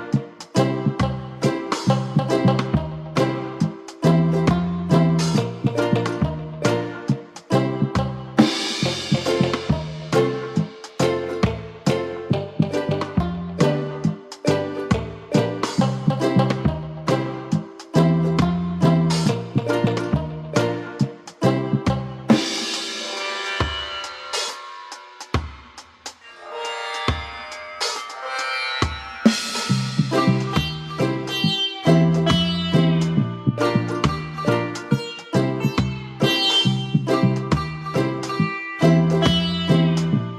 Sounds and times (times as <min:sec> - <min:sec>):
Music: 0:00.0 - 0:40.3.